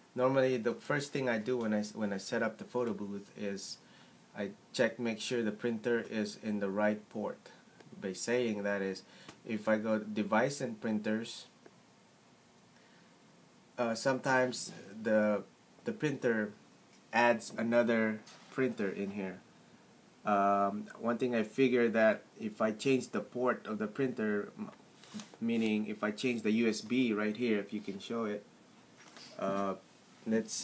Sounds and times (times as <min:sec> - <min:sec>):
Speech: 0:00.2 - 0:03.8, 0:04.4 - 0:11.6, 0:13.8 - 0:19.4, 0:20.3 - 0:24.8, 0:25.4 - 0:28.5, 0:29.4 - 0:30.6.